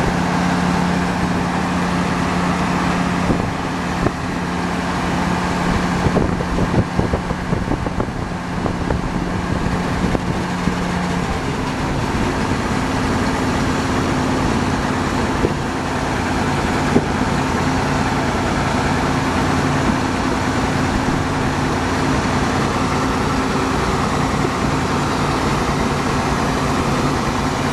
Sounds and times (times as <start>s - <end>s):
Vehicle: 0.0s - 27.7s.